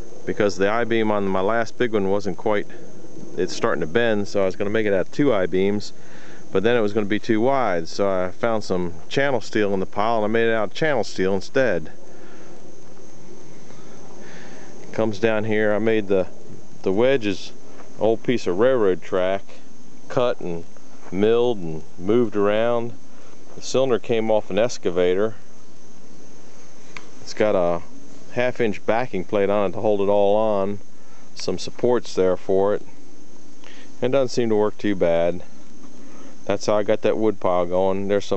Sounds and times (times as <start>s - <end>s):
Speech: 0.3s - 2.8s, 3.4s - 12.0s, 14.9s - 25.4s, 27.2s - 30.8s, 31.4s - 32.9s, 34.0s - 35.5s, 36.5s - 38.3s.